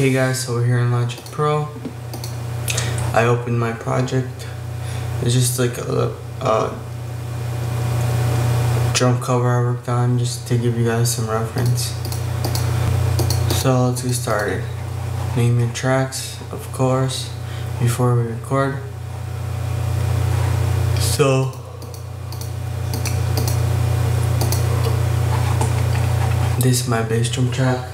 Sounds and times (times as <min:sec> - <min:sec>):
Speech: 0:00.0 - 0:01.8, 0:03.1 - 0:04.6, 0:05.2 - 0:06.9, 0:08.9 - 0:12.0, 0:13.5 - 0:19.0, 0:21.0 - 0:21.7, 0:26.6 - 0:27.9.